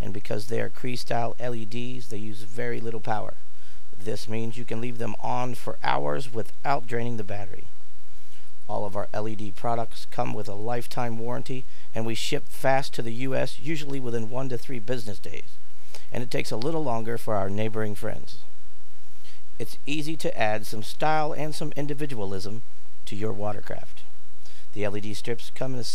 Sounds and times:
Speech: 0.0s - 3.4s, 4.0s - 7.7s, 8.7s - 15.5s, 16.1s - 18.5s, 19.6s - 24.1s, 24.7s - 25.9s.

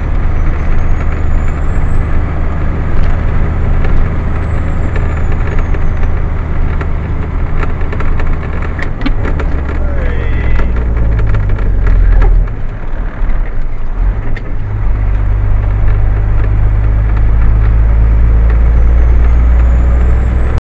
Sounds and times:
Car: 0.0s - 20.6s.

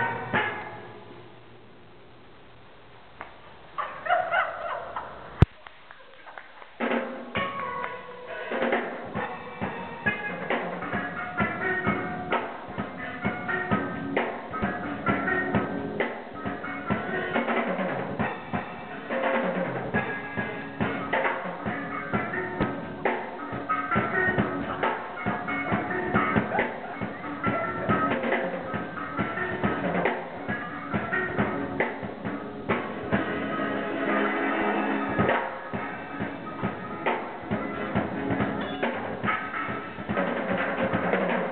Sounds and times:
Drum: 6.6s - 41.5s.

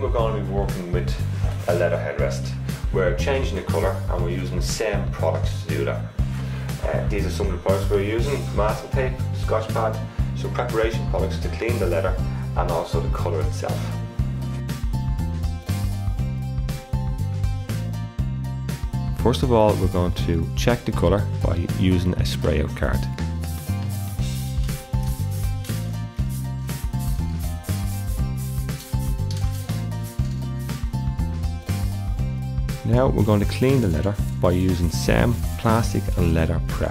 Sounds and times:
Speech: 0.0s - 6.1s, 6.8s - 14.0s, 19.2s - 23.2s, 32.8s - 36.9s
Music: 0.0s - 36.9s
Spray: 23.5s - 30.8s.

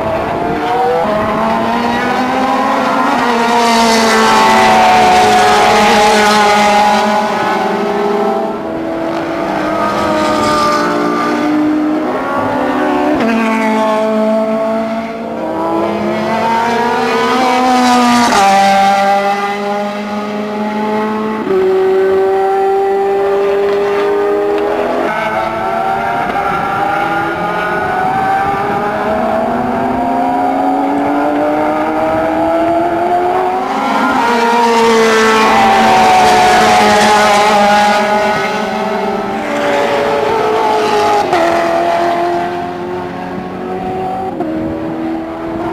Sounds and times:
Race car, auto racing: 0.0s - 45.7s.

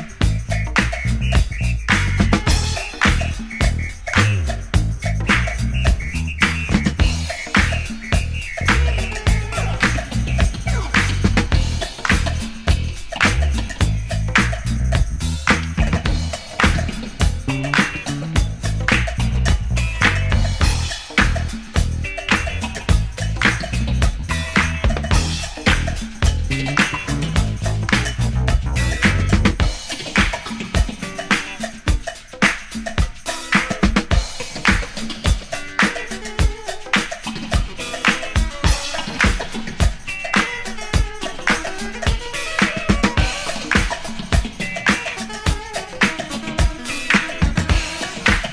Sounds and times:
Funk: 0.0s - 48.5s.

